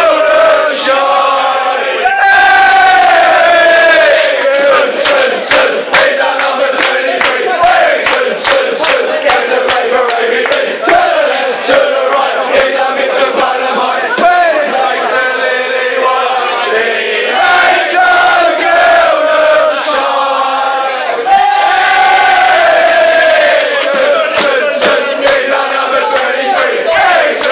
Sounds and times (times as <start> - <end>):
Choir: 0.0 - 27.5
Rapping: 4.7 - 11.0, 23.8 - 27.5.